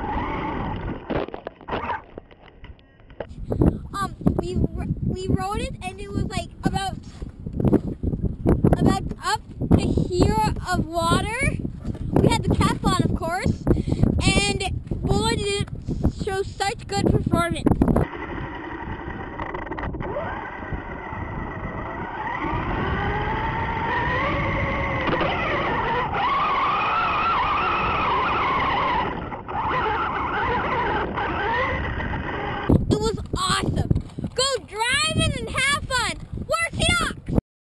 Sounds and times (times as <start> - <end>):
Speech: 4.0 - 7.0, 8.8 - 11.6, 14.2 - 17.6, 33.0 - 37.2.